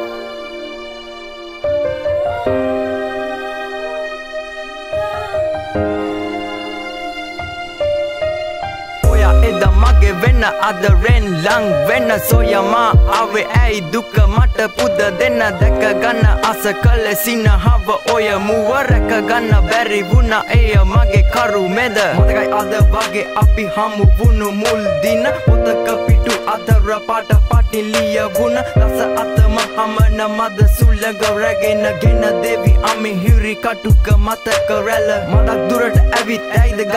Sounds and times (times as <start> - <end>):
Exciting music: 0.0 - 36.9.